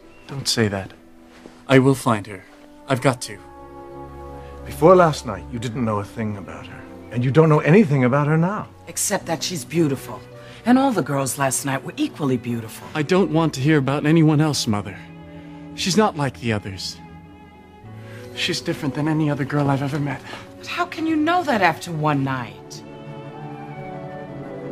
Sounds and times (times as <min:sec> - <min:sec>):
Music: 0:00.0 - 0:24.7.